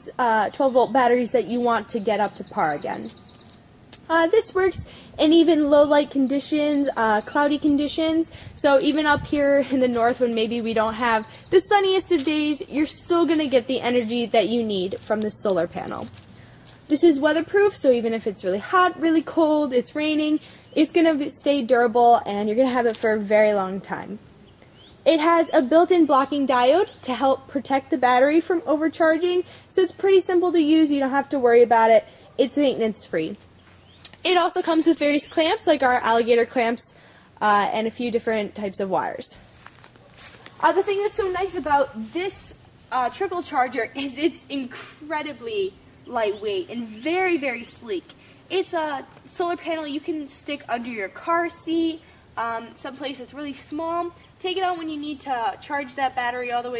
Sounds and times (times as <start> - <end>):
Speech: 0.0 - 3.2, 4.0 - 16.2, 16.9 - 24.2, 25.1 - 33.4, 34.1 - 39.4, 40.6 - 56.7.